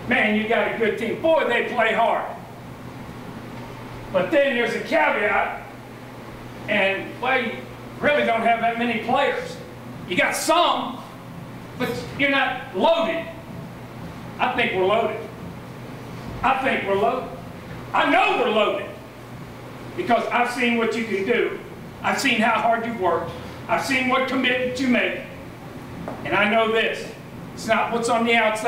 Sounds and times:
Speech: 0:00.0 - 0:02.4, 0:04.1 - 0:05.7, 0:06.7 - 0:11.1, 0:11.8 - 0:13.4, 0:14.4 - 0:15.4, 0:16.4 - 0:19.0, 0:20.0 - 0:25.4, 0:26.2 - 0:28.6.

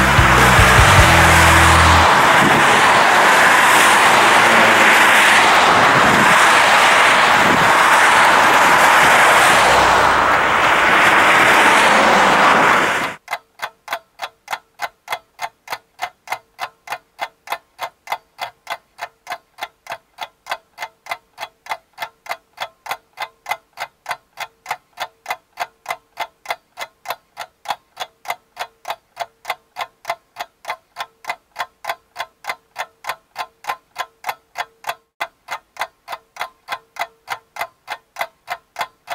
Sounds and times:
Car: 0:00.0 - 0:13.2
Outside, urban or manmade: 0:00.0 - 0:39.1.

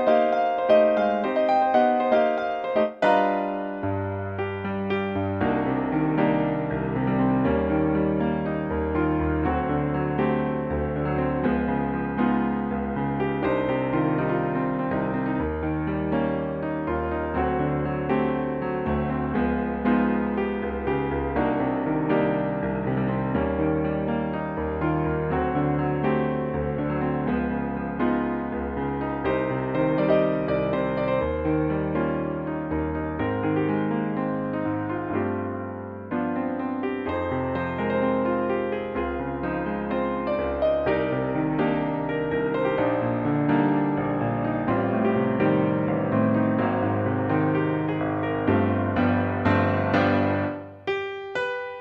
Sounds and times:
Music: 0:00.0 - 0:51.8.

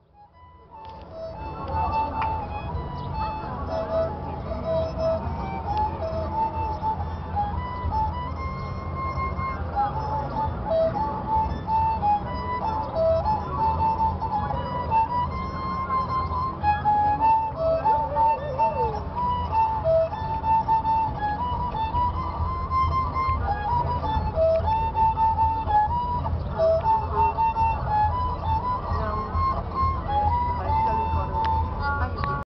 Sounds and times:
Violin, fiddle: 0:00.0 - 0:32.4
Speech: 0:01.4 - 0:06.0, 0:28.8 - 0:29.6, 0:30.6 - 0:32.4.

